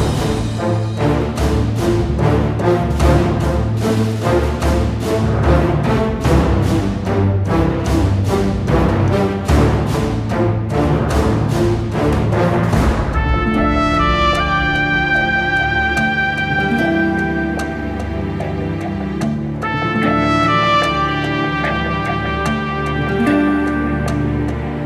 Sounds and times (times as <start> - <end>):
Music: 0.0 - 24.8.